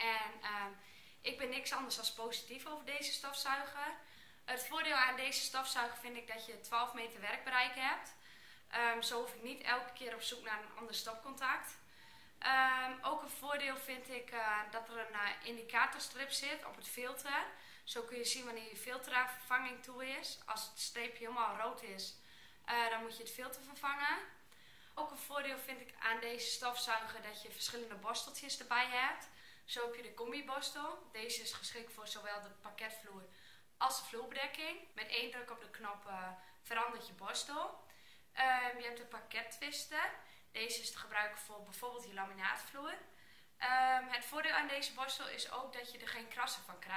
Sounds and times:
Speech: 0:00.0 - 0:11.8, 0:12.4 - 0:24.4, 0:25.0 - 0:46.9.

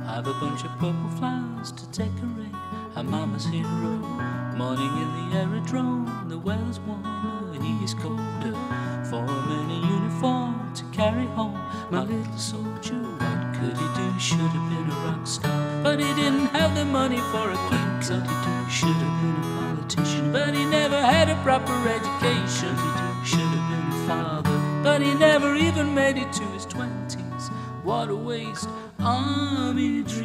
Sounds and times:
Guitar: 0:00.0 - 0:30.2.

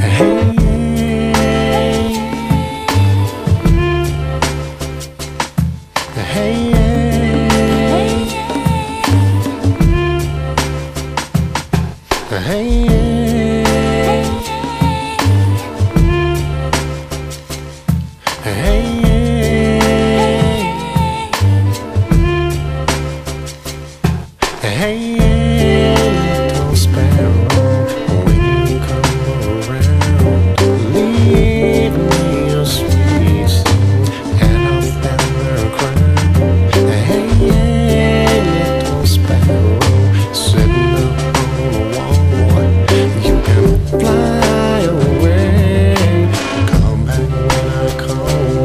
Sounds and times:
Music: 0:00.0 - 0:48.6.

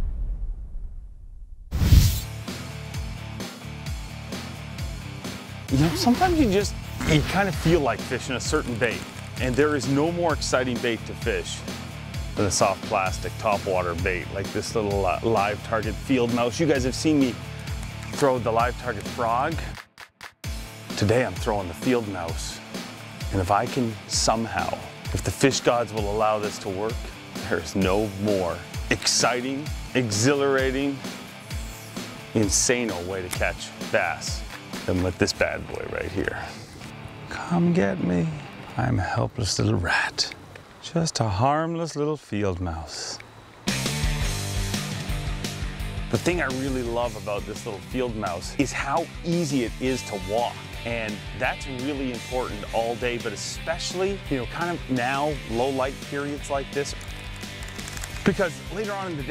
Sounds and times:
Music: 0:01.8 - 0:40.6, 0:43.4 - 0:59.3
Speech: 0:05.7 - 0:11.6, 0:12.4 - 0:17.4, 0:18.1 - 0:19.7, 0:21.0 - 0:22.6, 0:23.3 - 0:31.0, 0:32.4 - 0:36.6, 0:37.3 - 0:43.2, 0:46.1 - 0:57.0, 0:58.3 - 0:59.3.

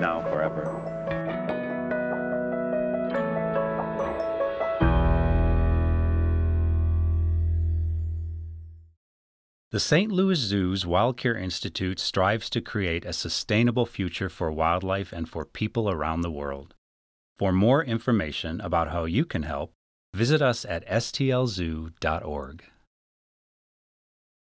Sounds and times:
Speech: 0:00.0 - 0:00.8, 0:09.8 - 0:16.8, 0:17.4 - 0:22.8.

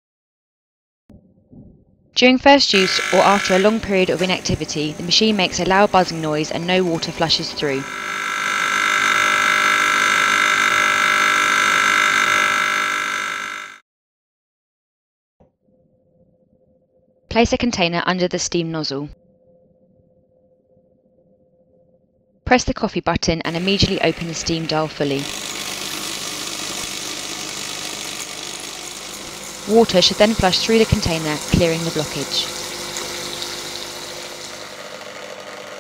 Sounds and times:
Pump (liquid): 0:23.5 - 0:35.8.

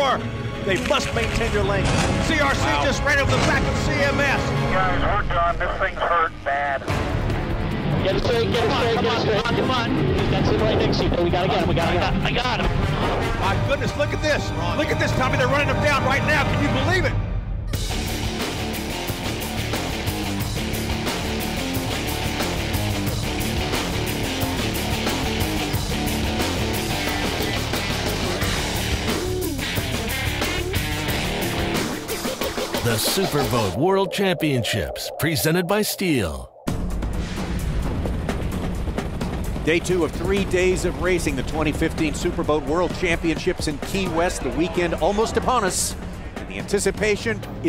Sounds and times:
Music: 0:00.0 - 0:33.8, 0:36.6 - 0:47.6.

